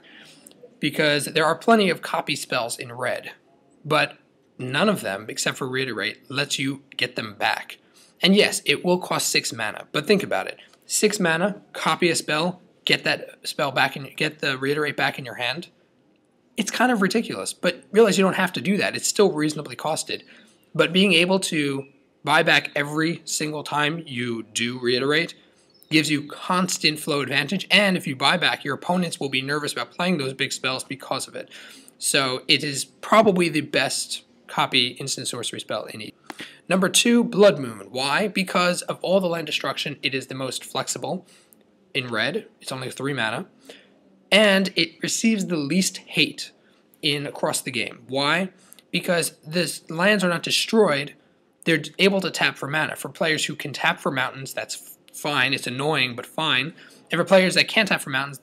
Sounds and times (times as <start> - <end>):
Speech: 0.0 - 15.7, 16.6 - 41.3, 42.0 - 43.5, 44.3 - 58.4.